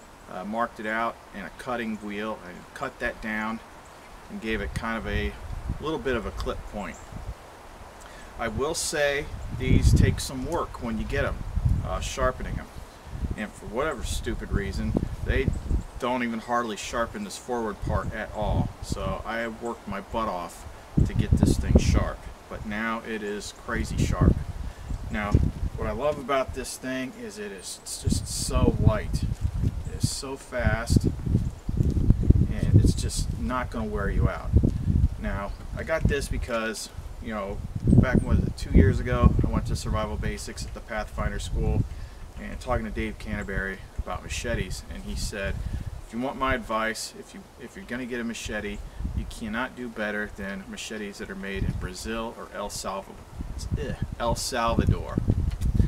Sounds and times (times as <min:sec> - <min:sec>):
Outside, rural or natural: 0:00.0 - 0:55.8
Speech: 0:00.3 - 0:03.6, 0:04.3 - 0:07.0, 0:08.4 - 0:12.7, 0:13.4 - 0:24.4, 0:25.1 - 0:29.3, 0:29.9 - 0:31.1, 0:32.5 - 0:34.6, 0:35.2 - 0:41.8, 0:42.4 - 0:55.2.